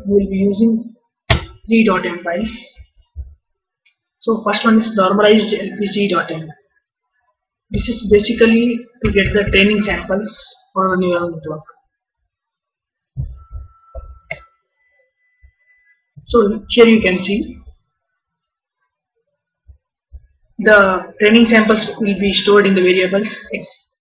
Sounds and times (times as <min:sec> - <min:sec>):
Female speech, woman speaking: 0:00.0 - 0:00.9, 0:01.7 - 0:02.9, 0:04.3 - 0:06.6, 0:07.8 - 0:11.7, 0:16.3 - 0:17.6, 0:20.6 - 0:23.9
Narration, monologue: 0:00.0 - 0:24.0.